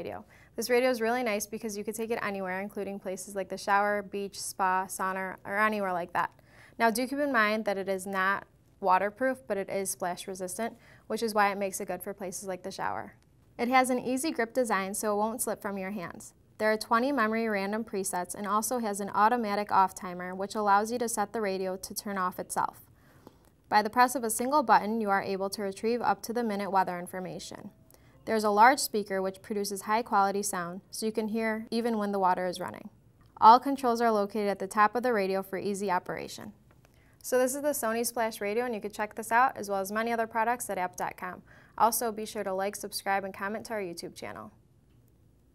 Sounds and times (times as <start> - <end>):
Speech: 0.0 - 22.8, 23.7 - 36.6, 37.2 - 44.6.